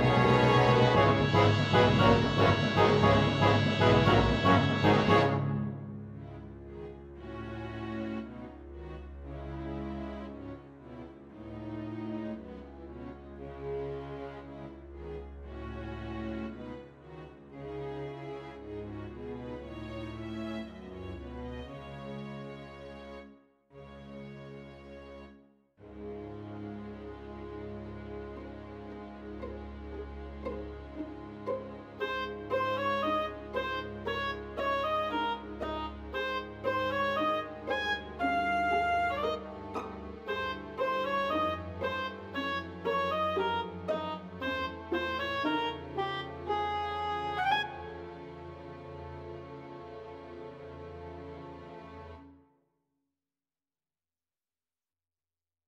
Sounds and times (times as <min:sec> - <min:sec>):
Clarinet: 0:00.0 - 0:06.0, 0:27.3 - 0:49.6.